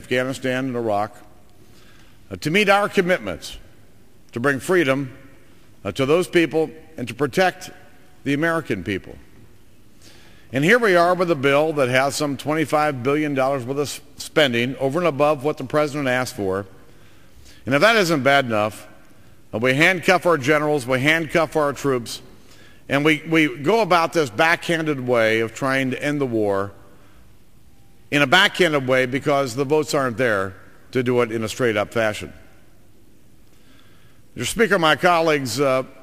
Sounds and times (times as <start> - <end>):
Male speech, man speaking: 0.0 - 1.2, 2.3 - 3.6, 4.4 - 5.1, 5.8 - 9.2, 10.5 - 16.7, 17.7 - 18.9, 19.6 - 22.2, 22.9 - 26.7, 28.1 - 32.4, 34.4 - 36.0
Narration, monologue: 0.0 - 36.0.